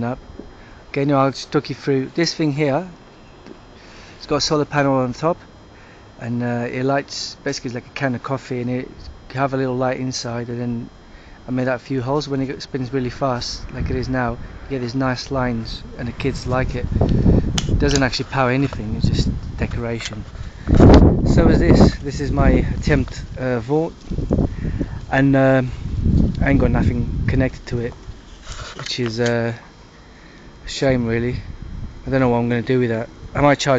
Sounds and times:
Speech: 0.0s - 0.2s, 0.9s - 3.0s, 4.2s - 5.4s, 6.2s - 16.9s, 17.8s - 20.3s, 21.3s - 24.0s, 25.1s - 25.8s, 26.4s - 28.0s, 28.8s - 29.7s, 30.6s - 31.5s, 32.1s - 33.7s.

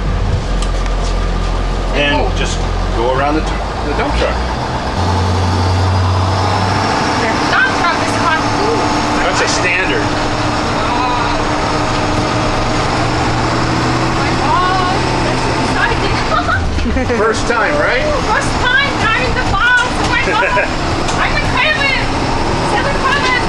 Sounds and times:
Bus: 0.0s - 23.4s.

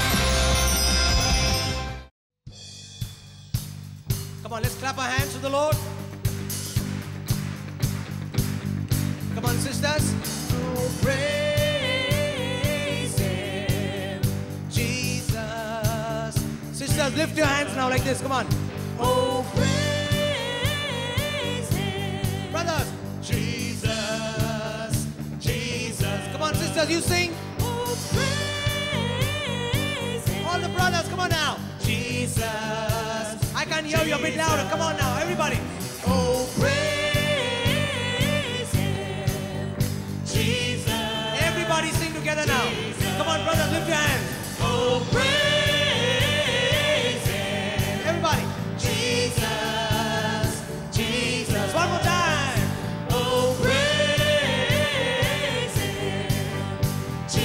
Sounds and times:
Music: 0.0s - 57.4s.

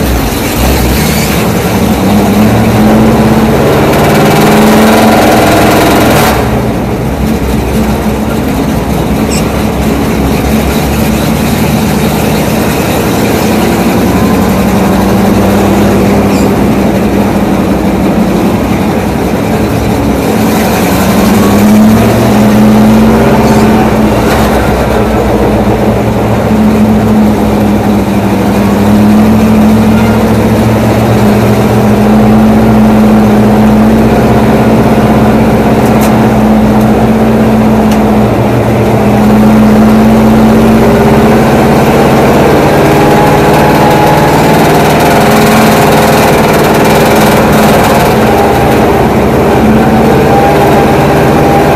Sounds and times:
Car: 0.0s - 51.7s.

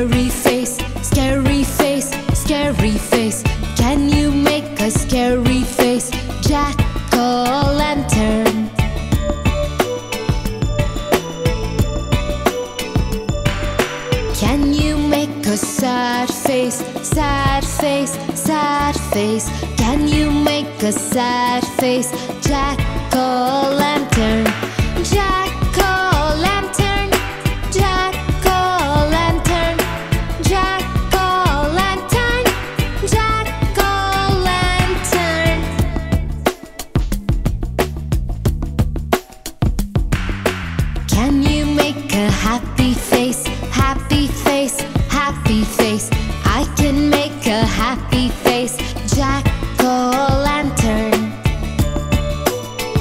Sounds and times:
Music for children: 0.0s - 37.9s, 39.2s - 53.0s.

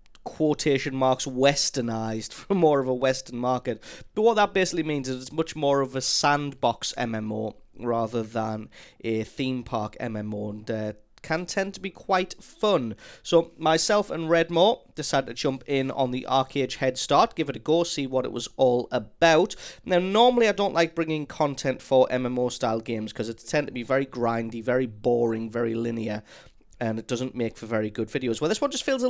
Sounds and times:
Speech: 0.2s - 29.0s.

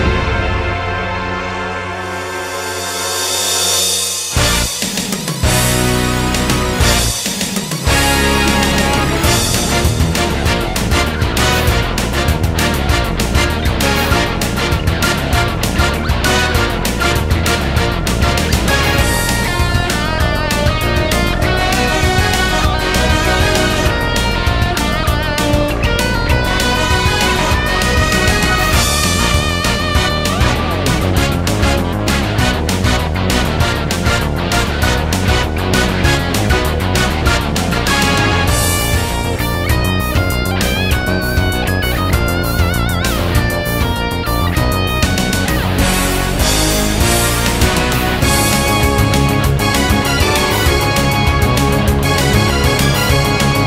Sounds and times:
Background music: 0.0s - 53.6s
Video game music: 0.0s - 53.6s.

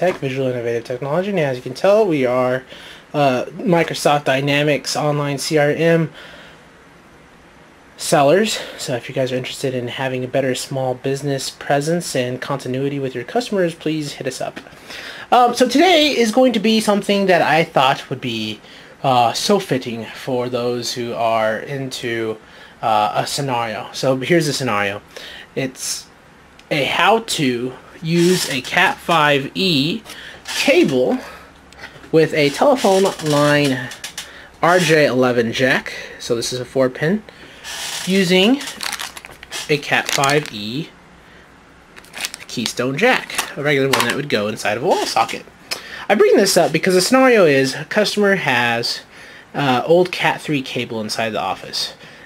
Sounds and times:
Speech: 0.0s - 6.2s, 8.0s - 14.7s, 15.3s - 26.1s, 26.7s - 31.4s, 32.1s - 37.3s, 38.0s - 38.8s, 39.7s - 41.0s, 42.4s - 52.0s.

